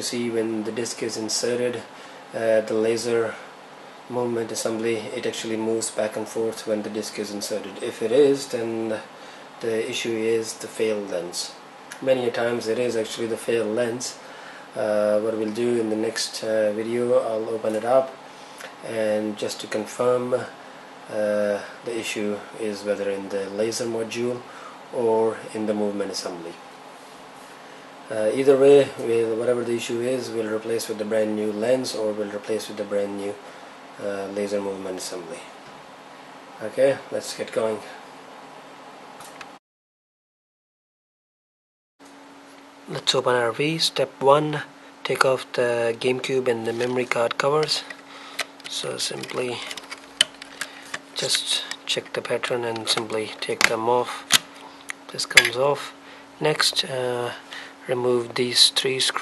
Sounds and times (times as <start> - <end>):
Speech: 0.0 - 3.5, 4.1 - 14.2, 14.8 - 18.2, 18.8 - 26.6, 28.1 - 33.4, 34.0 - 35.6, 36.6 - 38.0, 42.9 - 48.0, 48.7 - 49.8, 51.2 - 54.4, 55.1 - 59.2.